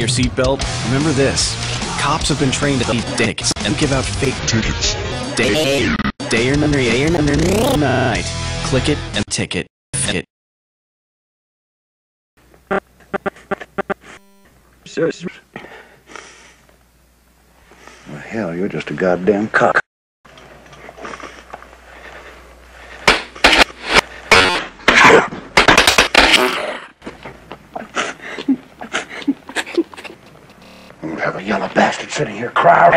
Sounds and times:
Speech: 0.0s - 10.3s, 18.1s - 19.8s, 31.0s - 32.9s
Music: 3.8s - 5.6s, 6.4s - 9.2s.

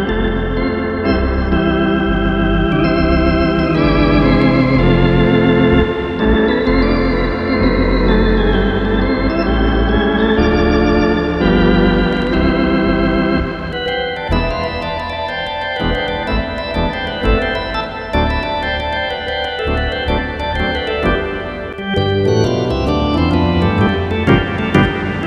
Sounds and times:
Hammond organ: 0.0s - 25.2s.

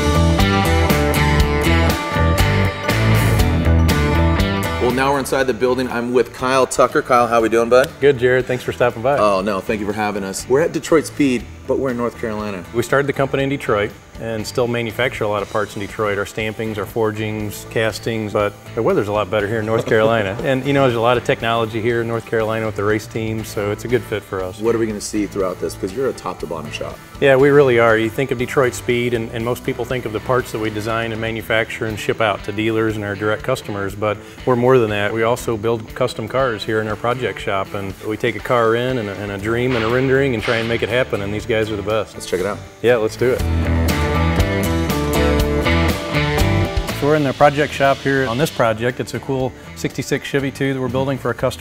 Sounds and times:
Music: 0.0s - 51.6s
Speech: 4.8s - 43.5s, 47.0s - 51.6s.

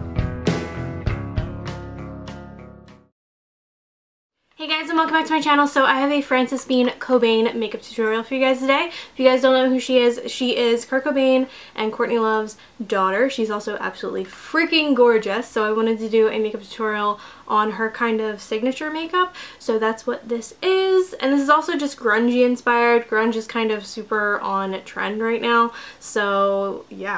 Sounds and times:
Speech: 4.6s - 27.1s.

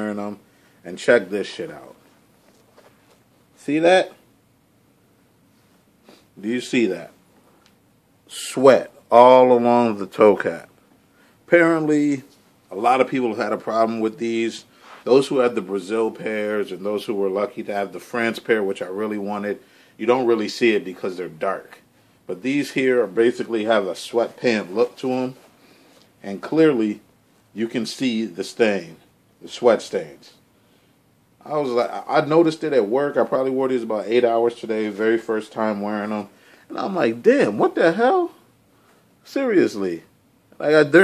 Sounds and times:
Speech: 0.0s - 2.0s, 3.6s - 4.2s, 6.4s - 7.2s, 8.3s - 10.8s, 11.5s - 25.4s, 26.2s - 30.4s, 31.4s - 38.5s, 39.2s - 41.0s.

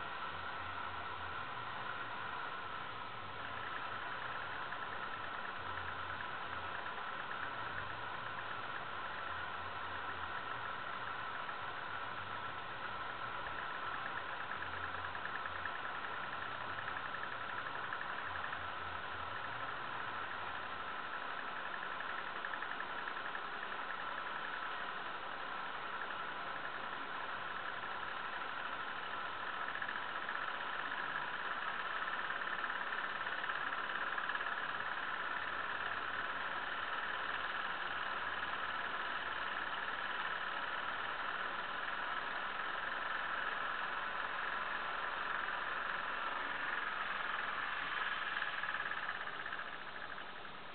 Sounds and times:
Engine: 0.0s - 50.7s.

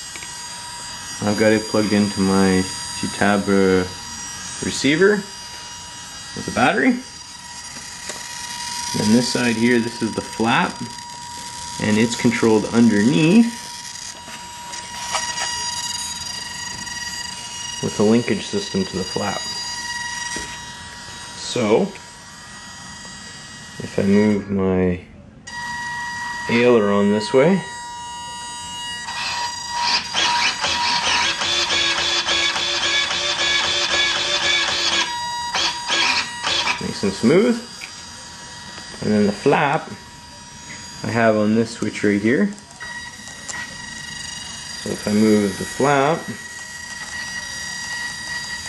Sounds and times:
Speech: 1.2s - 4.0s, 4.6s - 5.3s, 6.4s - 7.1s, 9.0s - 10.9s, 11.8s - 13.6s, 17.8s - 19.5s, 21.4s - 22.0s, 23.8s - 25.1s, 26.5s - 27.7s, 36.8s - 37.7s, 39.0s - 40.0s, 41.0s - 42.6s, 44.8s - 46.4s.

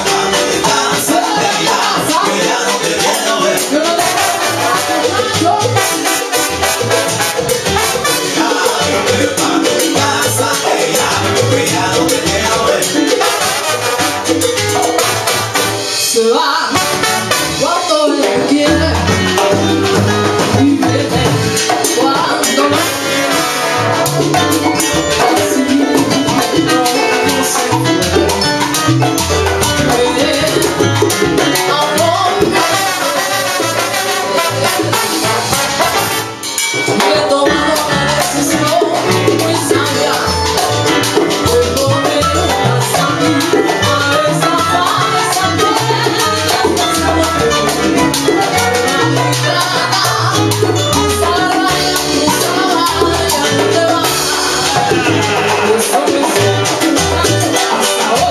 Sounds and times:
Exciting music: 0.0s - 42.0s, 53.3s - 57.7s.

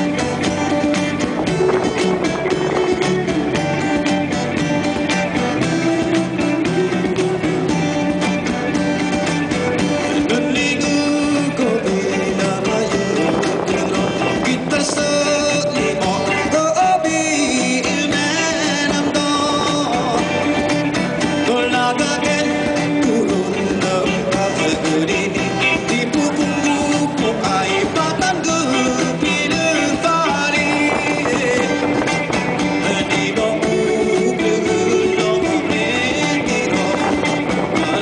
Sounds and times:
Music: 0.0s - 38.0s.

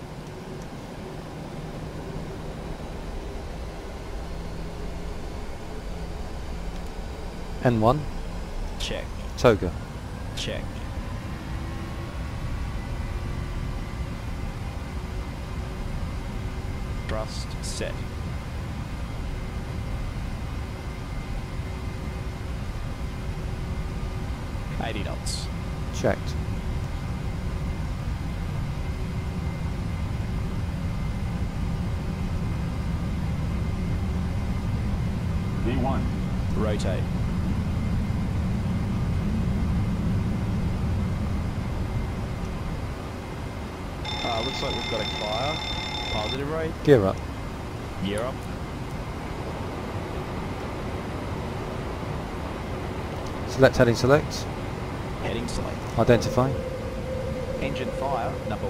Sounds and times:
Speech: 8.8s - 9.8s, 10.4s - 10.7s, 24.8s - 26.3s, 35.6s - 37.1s, 48.0s - 48.4s, 53.5s - 54.5s, 55.2s - 56.6s, 57.6s - 58.7s.

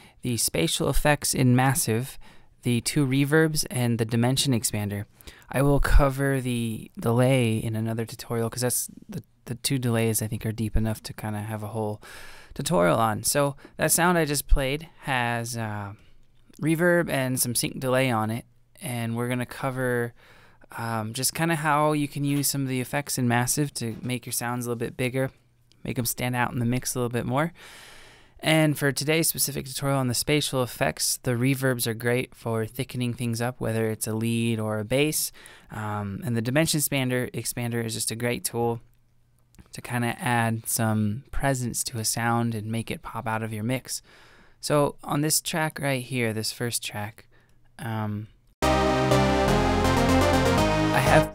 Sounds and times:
Speech: 0.2s - 12.0s, 12.6s - 27.6s, 28.4s - 38.9s, 39.7s - 48.4s, 51.0s - 51.3s.

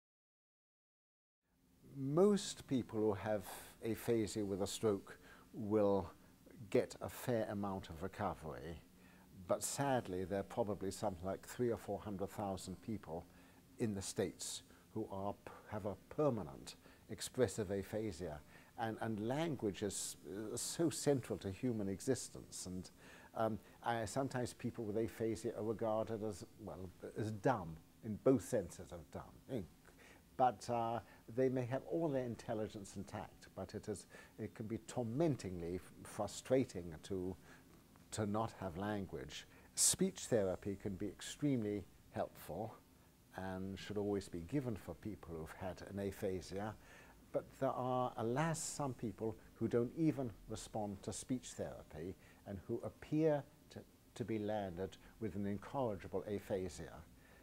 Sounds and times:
Speech: 1.9s - 29.8s, 30.4s - 37.5s, 38.1s - 57.1s.

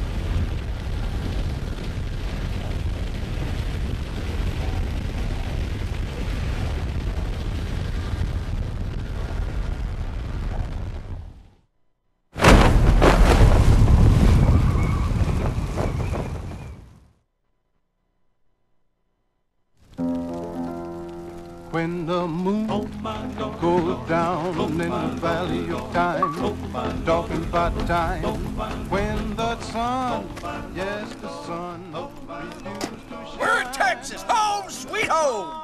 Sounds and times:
Eruption: 0.0s - 11.7s, 12.4s - 17.3s, 19.8s - 35.6s.

